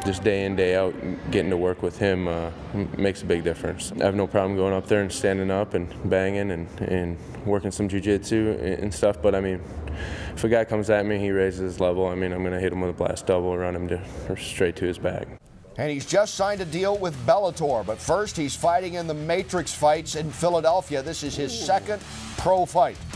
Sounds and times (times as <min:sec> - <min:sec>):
Speech: 0:10.4 - 0:23.0.